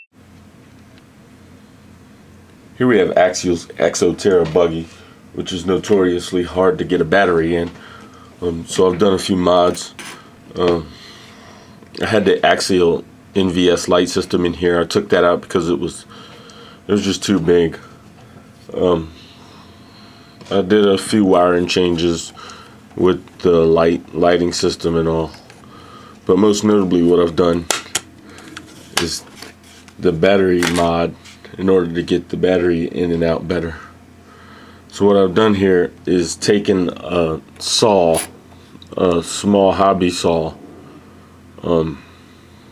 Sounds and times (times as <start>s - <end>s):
Speech: 2.8s - 7.8s, 8.4s - 11.0s, 12.0s - 16.1s, 16.9s - 17.9s, 18.7s - 19.2s, 20.5s - 22.4s, 23.0s - 25.4s, 26.3s - 27.7s, 28.9s - 29.3s, 30.0s - 34.0s, 34.9s - 40.6s, 41.6s - 42.0s.